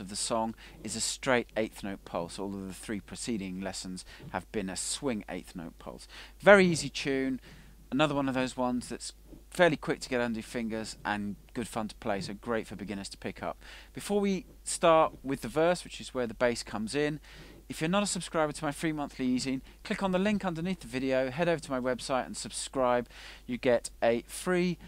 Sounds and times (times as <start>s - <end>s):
Speech: 0.0s - 24.8s.